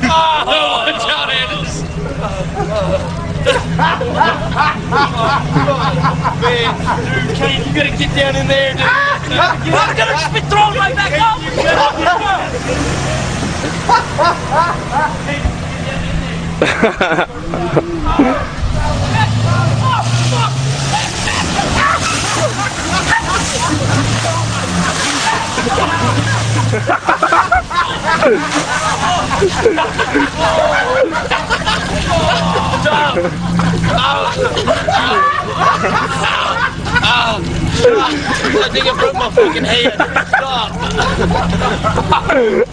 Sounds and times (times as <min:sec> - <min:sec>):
Vehicle: 0:00.0 - 0:42.7.